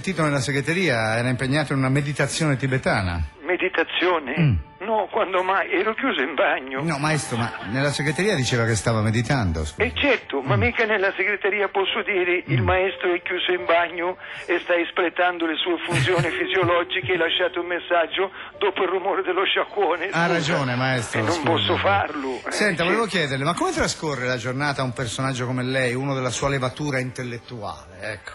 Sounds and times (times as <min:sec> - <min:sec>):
Music: 0:00.0 - 0:28.3
Speech: 0:00.0 - 0:28.3.